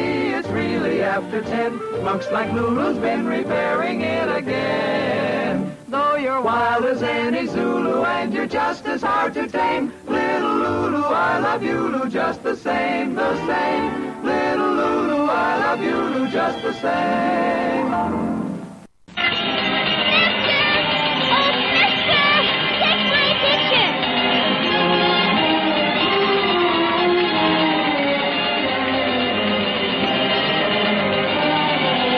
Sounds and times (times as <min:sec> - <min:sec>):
Music: 0:00.0 - 0:32.1.